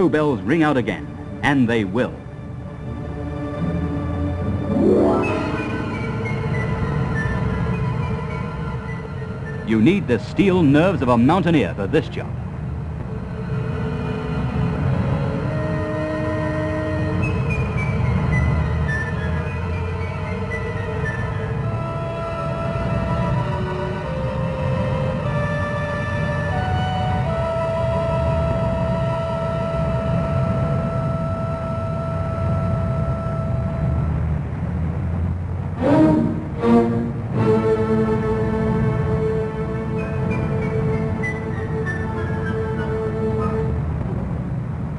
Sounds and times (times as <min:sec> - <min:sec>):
Music: 0:00.0 - 0:44.9
Outside, urban or manmade: 0:00.0 - 0:44.9.